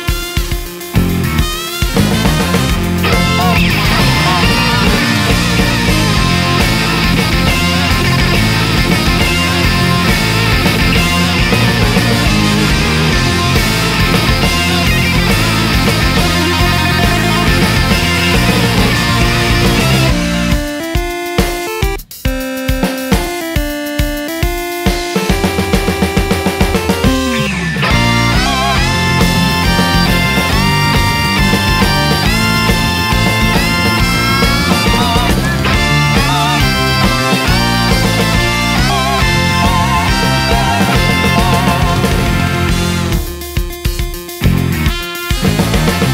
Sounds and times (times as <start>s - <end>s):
Music: 0.0s - 46.1s.